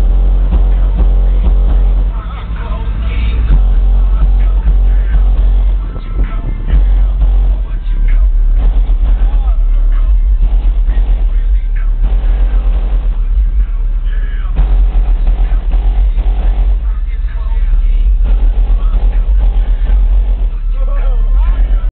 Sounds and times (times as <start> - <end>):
Dance music: 0.0 - 21.9
Speech: 9.0 - 14.6, 16.8 - 21.9.